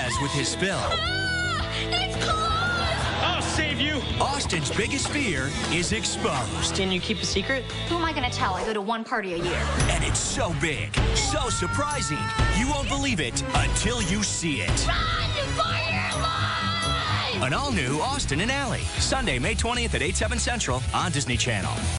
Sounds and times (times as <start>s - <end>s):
Music: 0.0s - 21.9s
Speech: 17.4s - 21.8s.